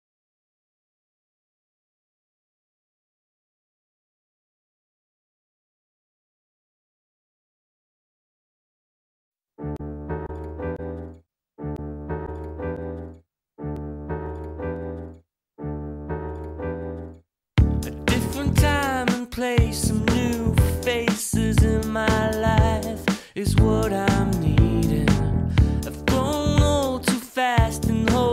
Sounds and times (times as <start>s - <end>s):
Music: 9.6s - 28.3s.